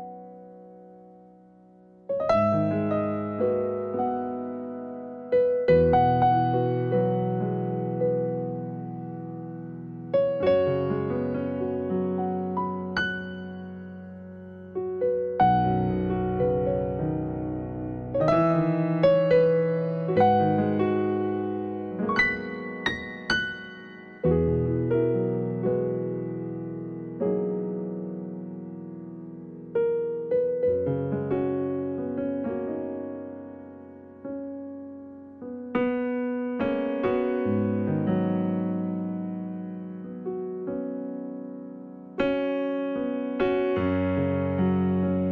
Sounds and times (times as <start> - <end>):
Music: 0.0 - 45.3.